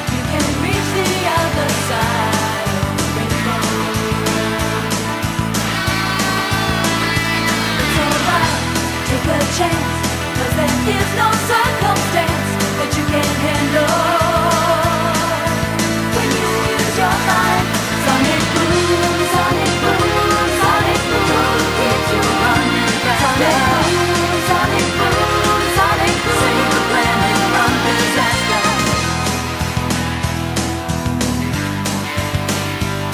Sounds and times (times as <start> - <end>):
Rhythm and blues: 0.0 - 33.1.